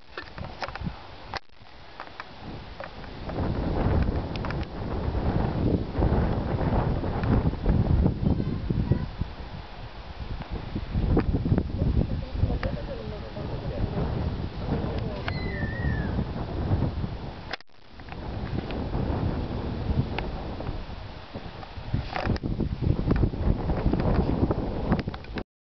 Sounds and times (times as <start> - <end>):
Outside, rural or natural: 0.0 - 25.5.